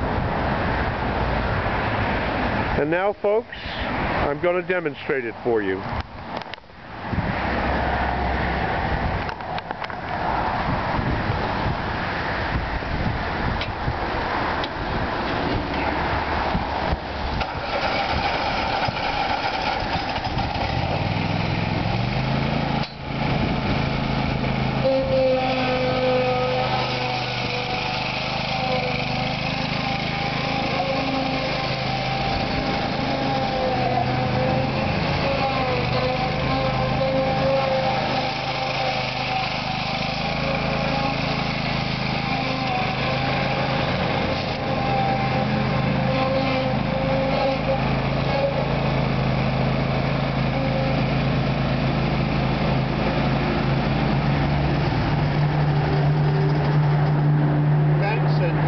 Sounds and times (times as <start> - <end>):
Lawn mower: 0.0 - 10.1, 10.9 - 58.6
Outside, urban or manmade: 0.0 - 58.6
Vehicle: 0.0 - 58.6.